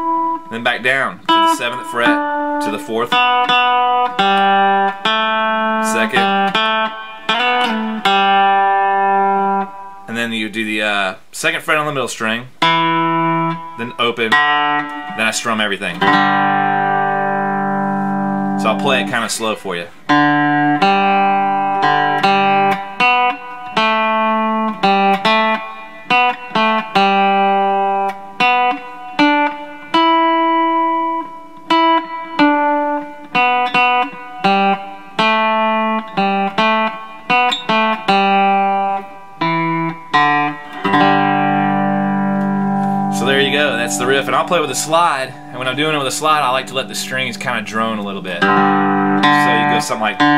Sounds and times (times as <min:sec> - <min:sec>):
Tapping (guitar technique): 0:00.0 - 0:10.6, 0:12.6 - 0:50.3.